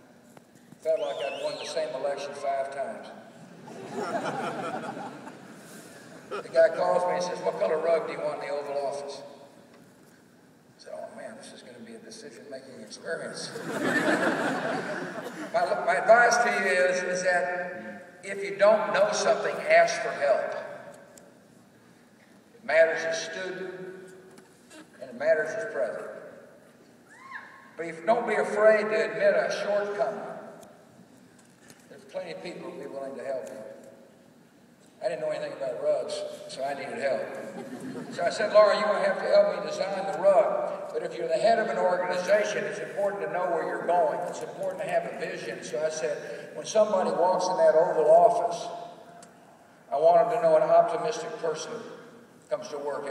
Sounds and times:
Narration, monologue: 0:00.0 - 0:53.1
Male speech, man speaking: 0:00.8 - 0:03.2, 0:06.4 - 0:09.3, 0:10.8 - 0:13.5, 0:15.6 - 0:20.7, 0:22.6 - 0:23.8, 0:25.0 - 0:26.2, 0:27.8 - 0:30.4, 0:31.9 - 0:33.7, 0:35.0 - 0:37.4, 0:38.1 - 0:48.8, 0:49.9 - 0:53.1.

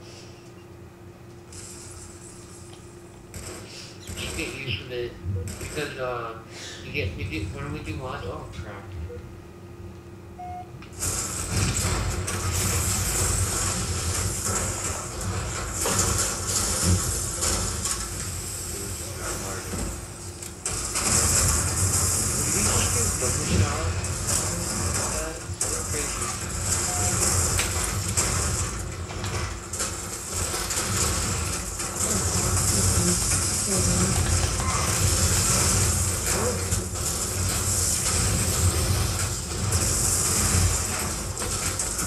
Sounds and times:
Speech: 0:04.1 - 0:09.0, 0:22.4 - 0:26.3.

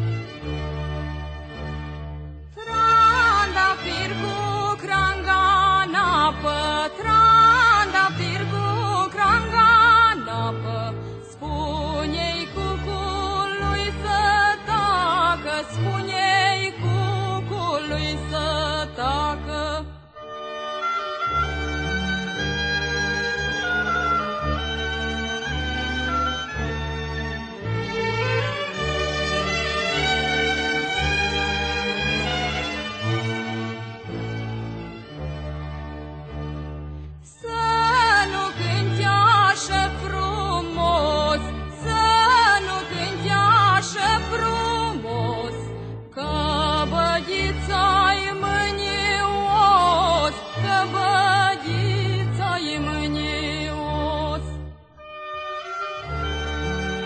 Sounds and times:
Music: 0:00.0 - 0:57.0.

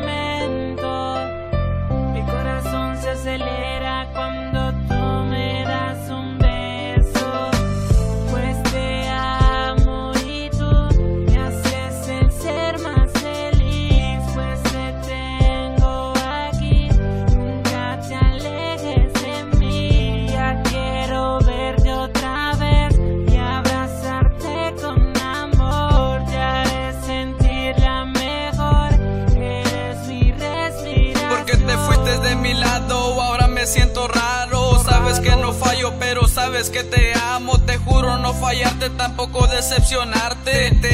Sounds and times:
Music: 0:00.0 - 0:40.9.

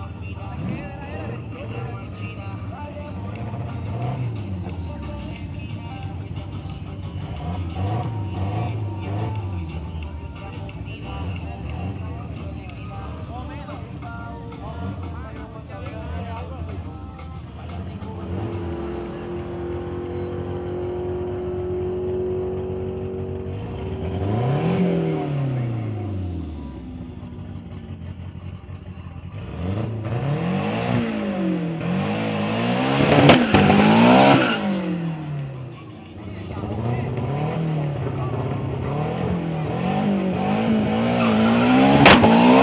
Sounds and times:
Car: 0:00.0 - 0:42.6
Accelerating, revving, vroom: 0:07.2 - 0:09.4, 0:18.2 - 0:26.2, 0:29.4 - 0:35.4, 0:36.6 - 0:42.6.

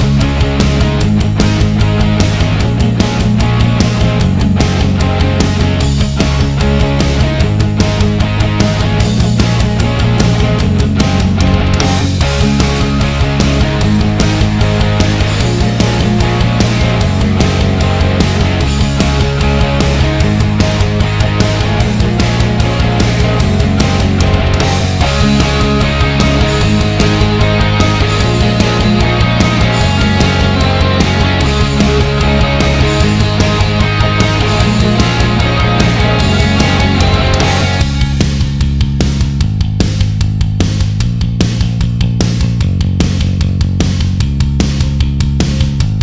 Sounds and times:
Grunge: 0:00.0 - 0:46.0.

